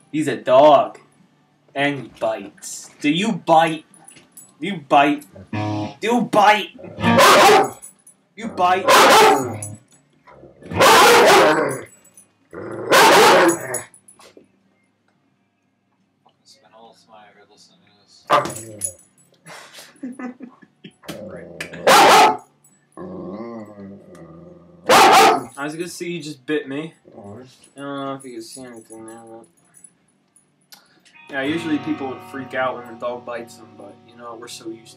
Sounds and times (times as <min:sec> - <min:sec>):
Speech: 0:06.0 - 0:06.8, 0:08.4 - 0:09.0, 0:16.4 - 0:18.5, 0:25.6 - 0:29.5, 0:31.3 - 0:34.9
Bow-wow: 0:06.8 - 0:07.8, 0:08.6 - 0:09.7, 0:10.6 - 0:11.9, 0:12.8 - 0:13.9, 0:18.3 - 0:18.9, 0:21.6 - 0:22.4, 0:24.8 - 0:25.5
Yip: 0:07.0 - 0:07.8, 0:08.8 - 0:09.6, 0:10.7 - 0:11.8, 0:12.9 - 0:13.8, 0:21.8 - 0:22.4, 0:24.9 - 0:25.5.